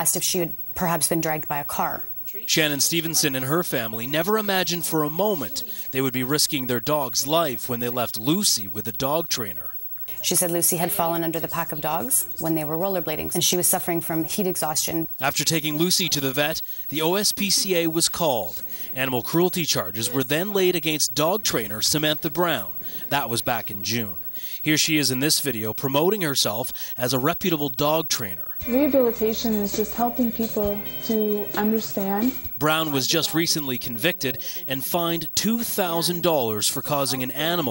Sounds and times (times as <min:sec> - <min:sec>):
Speech: 0:01.0 - 0:37.7.